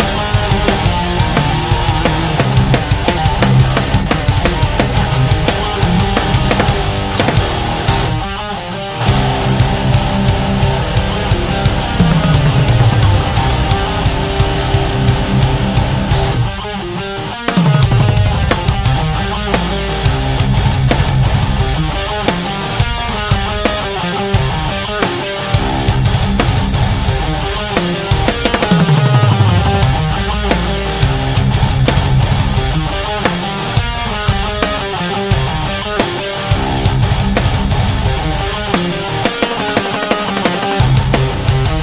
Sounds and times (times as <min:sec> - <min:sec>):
Guitar: 0:00.0 - 0:41.8.